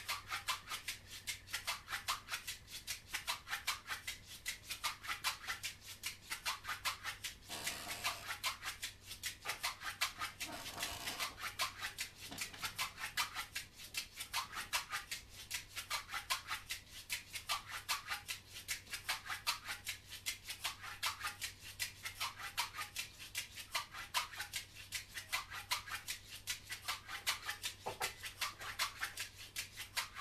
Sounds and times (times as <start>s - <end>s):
Percussion: 0.0s - 30.2s.